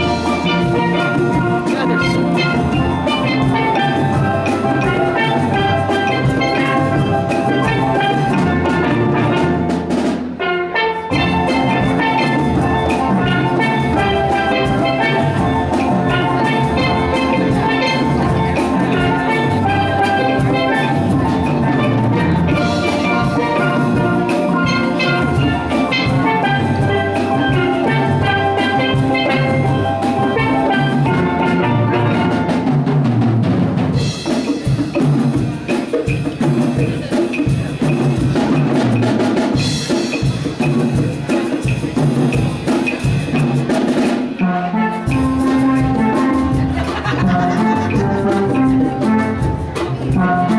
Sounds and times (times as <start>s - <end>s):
Bass drum: 0.0s - 10.0s, 11.2s - 43.6s, 45.2s - 50.5s
Drum roll: 0.0s - 50.5s.